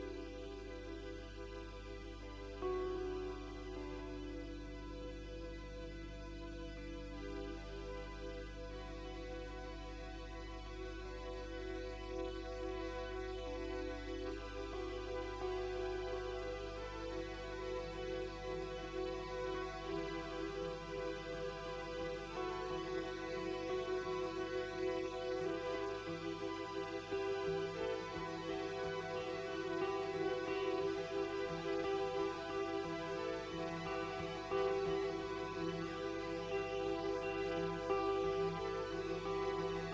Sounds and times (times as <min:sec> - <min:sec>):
Music: 0:00.0 - 0:39.9.